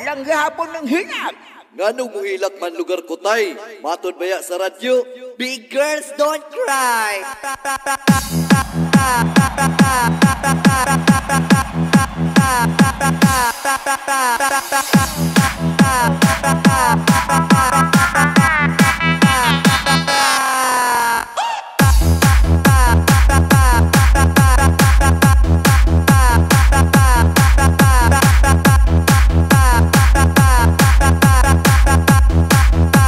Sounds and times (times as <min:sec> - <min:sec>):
Techno: 0:07.0 - 0:33.0.